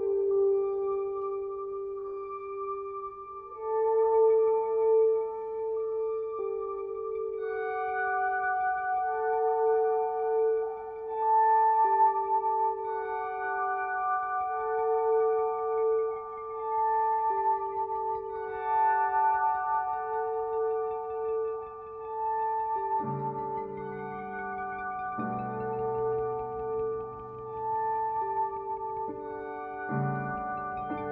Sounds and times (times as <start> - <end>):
Music: 0.0 - 31.1.